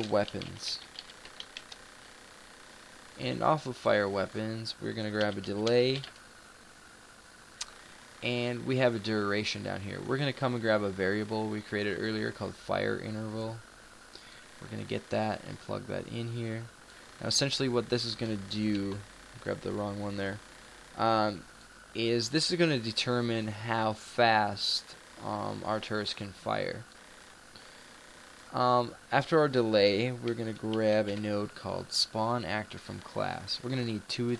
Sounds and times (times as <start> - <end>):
Speech: 0.0 - 0.9, 3.2 - 6.1, 8.2 - 13.6, 14.6 - 20.4, 21.0 - 21.4, 22.0 - 26.9, 28.5 - 34.3.